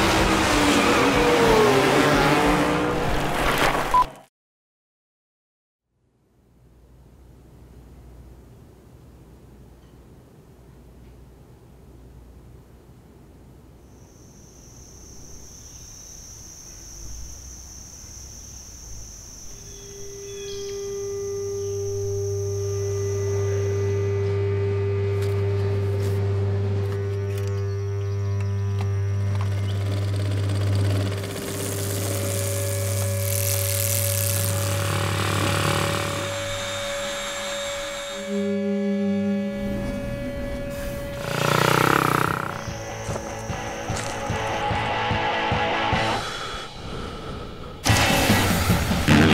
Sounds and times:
Motorcycle: 0.0 - 3.6, 19.1 - 46.2, 47.8 - 49.3.

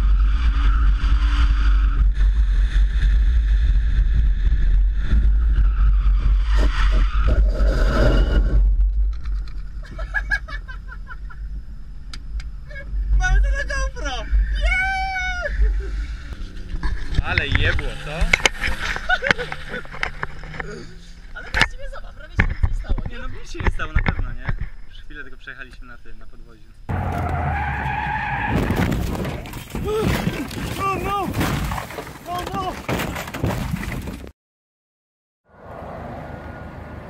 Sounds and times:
Skidding: 12.6 - 25.2, 26.9 - 34.3.

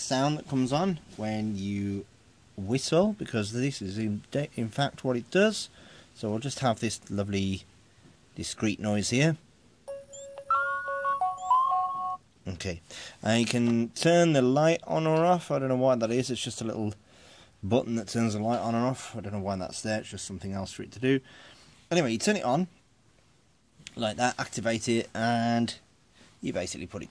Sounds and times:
Speech: 0.0 - 7.7, 8.4 - 9.4, 12.4 - 17.0, 17.6 - 21.3, 21.9 - 22.8, 23.9 - 27.1.

